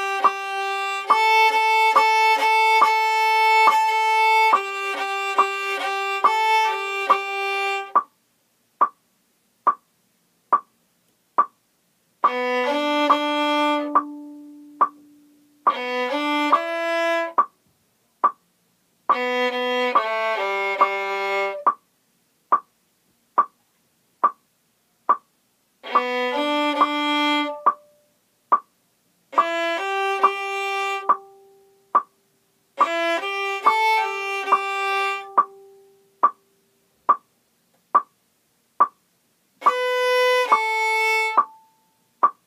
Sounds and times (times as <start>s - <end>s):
Violin, fiddle: 0.0s - 8.0s, 12.2s - 17.5s, 19.1s - 21.8s, 25.8s - 28.0s, 29.3s - 31.5s, 32.8s - 35.8s, 39.6s - 41.8s.